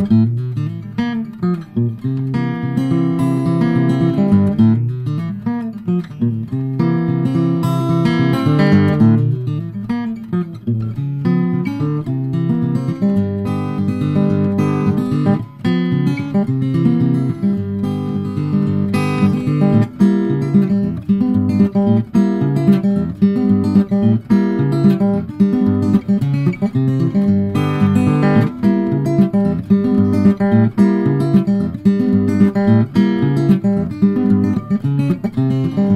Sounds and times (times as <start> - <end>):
Acoustic guitar: 0.0 - 35.9
Strum: 0.0 - 35.9.